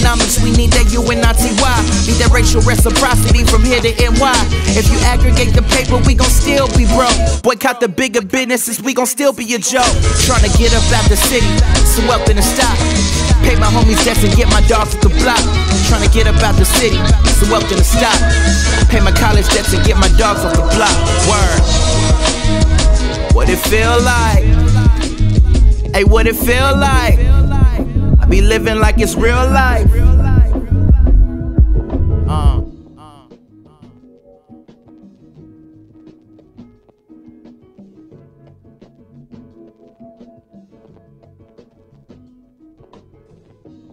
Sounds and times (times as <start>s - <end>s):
Music of Africa: 0.0s - 7.5s, 9.8s - 43.9s.